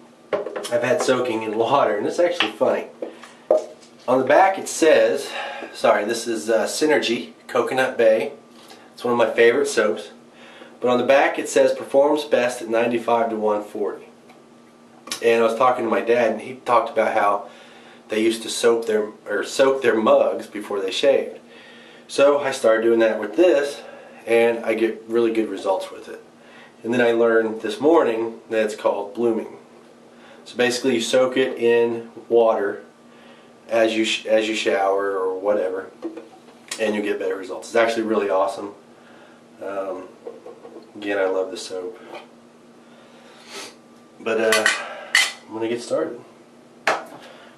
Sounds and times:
Speech: 0:00.7 - 0:03.0, 0:04.1 - 0:08.4, 0:09.0 - 0:10.2, 0:10.8 - 0:14.1, 0:15.1 - 0:17.5, 0:18.1 - 0:21.4, 0:22.1 - 0:26.2, 0:26.8 - 0:29.6, 0:30.4 - 0:32.9, 0:33.7 - 0:36.0, 0:36.7 - 0:38.8, 0:39.6 - 0:40.2, 0:40.9 - 0:42.0, 0:44.2 - 0:44.8, 0:45.5 - 0:46.3.

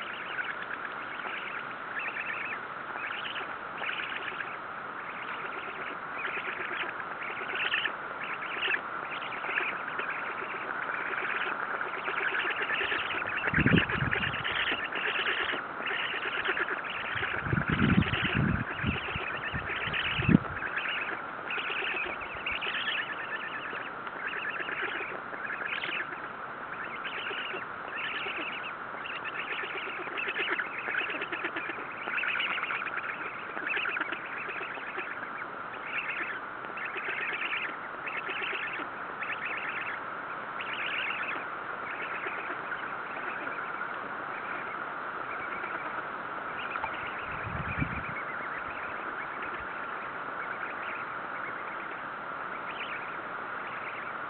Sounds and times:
Duck: 0:00.0 - 0:40.0, 0:40.6 - 0:54.2
Bird: 0:00.0 - 0:54.2.

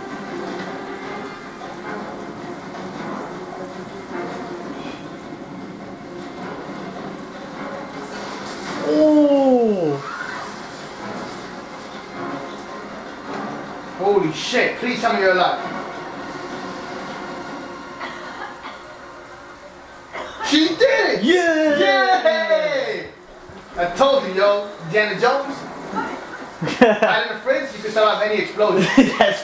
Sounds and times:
Music: 0:00.0 - 0:29.4.

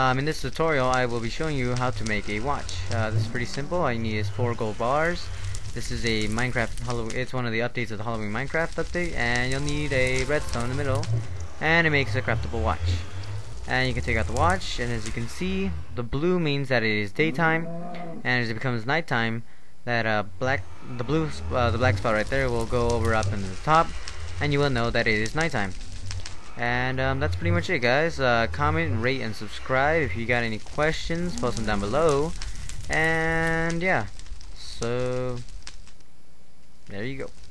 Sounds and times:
Speech: 0:00.0 - 0:13.1, 0:13.7 - 0:25.8, 0:26.6 - 0:35.4, 0:36.9 - 0:37.3.

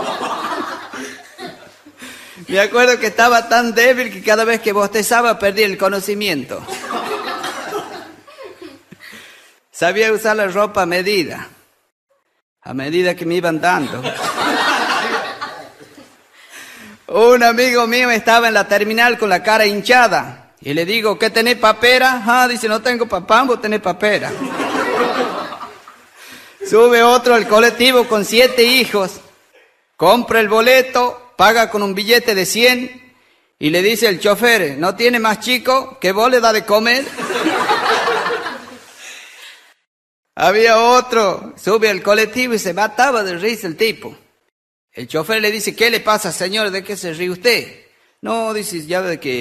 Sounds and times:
Laughter: 0:00.0 - 0:02.0, 0:06.6 - 0:09.2, 0:13.8 - 0:16.2, 0:24.2 - 0:26.0, 0:37.0 - 0:39.0
Speech: 0:02.5 - 0:06.7, 0:09.8 - 0:11.6, 0:12.6 - 0:14.2, 0:17.1 - 0:24.4, 0:26.6 - 0:29.3, 0:30.0 - 0:33.0, 0:33.6 - 0:37.1, 0:40.4 - 0:44.2, 0:45.0 - 0:49.4.

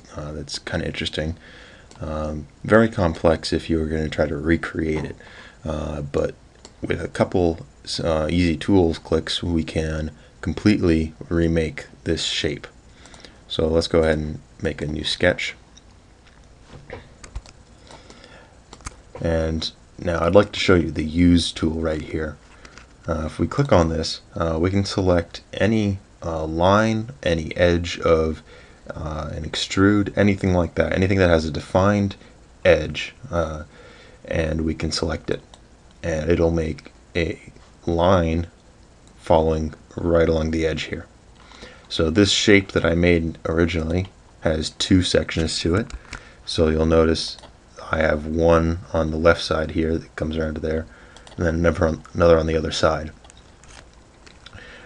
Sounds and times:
Speech: 0:00.0 - 0:01.4, 0:02.0 - 0:12.8, 0:13.5 - 0:15.6, 0:19.2 - 0:22.4, 0:23.0 - 0:33.7, 0:34.3 - 0:35.4, 0:36.0 - 0:38.6, 0:39.2 - 0:41.1, 0:41.9 - 0:45.9, 0:46.5 - 0:53.2.

